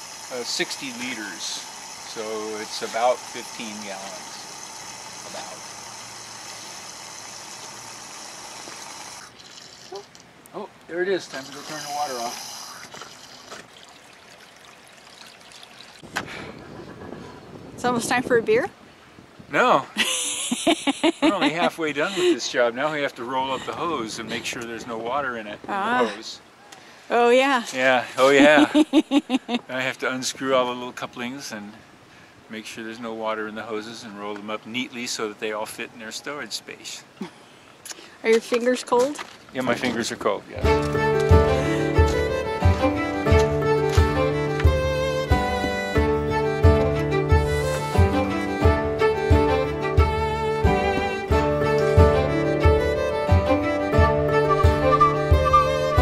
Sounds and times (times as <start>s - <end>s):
Outside, urban or manmade: 0.0s - 56.0s.